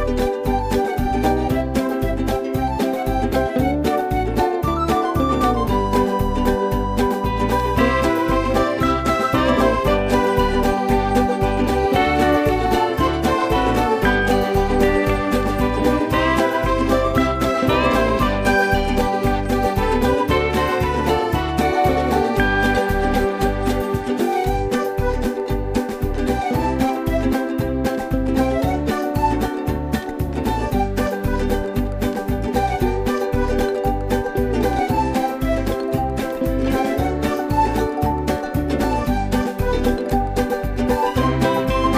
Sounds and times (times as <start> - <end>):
Music: 0.0 - 41.9.